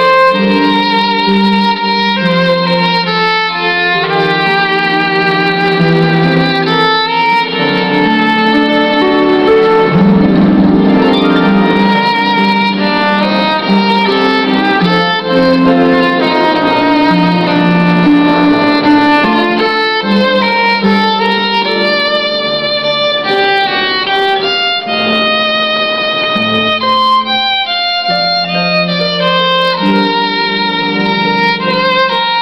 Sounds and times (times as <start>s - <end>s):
Violin, fiddle: 0.0s - 32.4s.